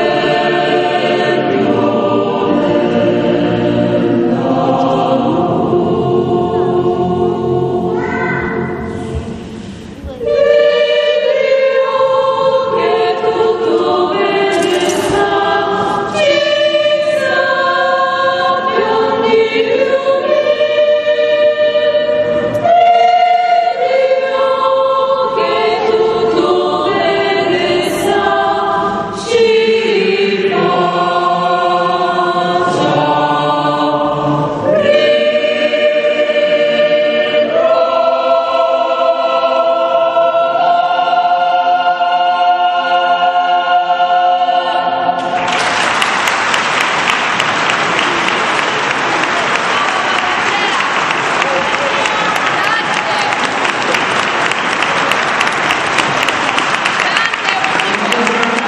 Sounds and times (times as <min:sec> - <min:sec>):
Chant: 0:00.0 - 0:45.7, 0:48.0 - 0:58.6
Choir: 0:00.0 - 0:58.6.